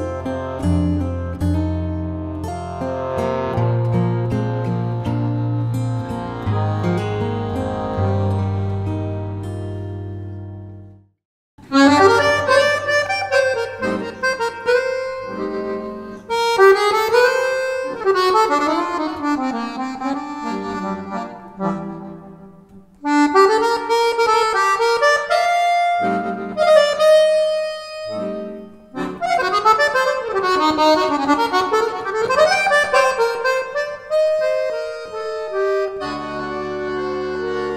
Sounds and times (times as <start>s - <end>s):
Accordion: 0.0s - 11.0s, 11.6s - 37.7s.